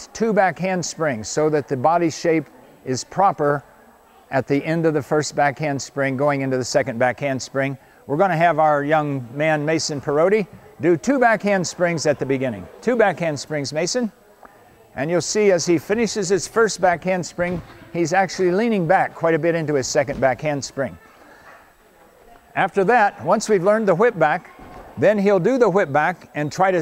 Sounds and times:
Speech: 0.0s - 21.2s, 22.2s - 26.8s.

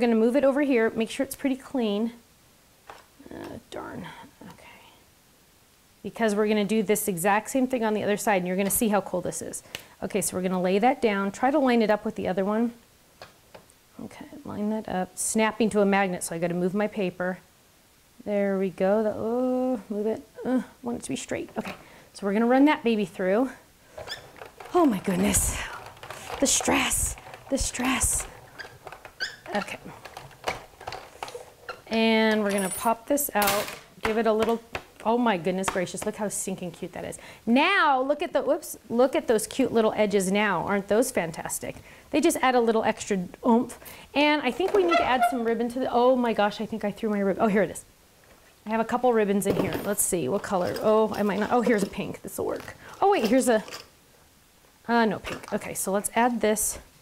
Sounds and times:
Speech: 0.0s - 2.2s, 3.2s - 4.8s, 6.0s - 12.8s, 14.0s - 17.5s, 18.2s - 23.6s, 24.7s - 28.3s, 29.5s - 30.0s, 31.9s - 47.9s, 48.7s - 53.8s, 54.9s - 56.9s.

